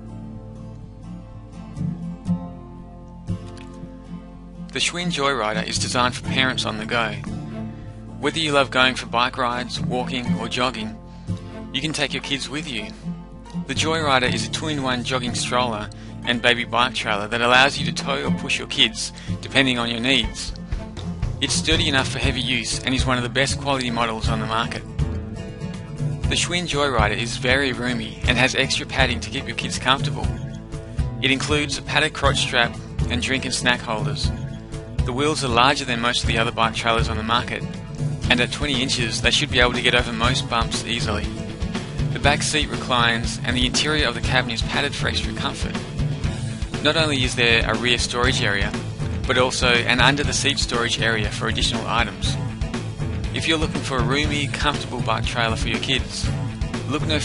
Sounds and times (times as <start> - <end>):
Music: 0.0 - 57.2
Speech: 4.7 - 7.3, 8.2 - 11.0, 11.8 - 13.0, 13.7 - 20.6, 21.4 - 24.8, 26.3 - 30.4, 31.2 - 34.4, 35.0 - 41.4, 42.1 - 45.8, 46.8 - 52.4, 53.4 - 57.2.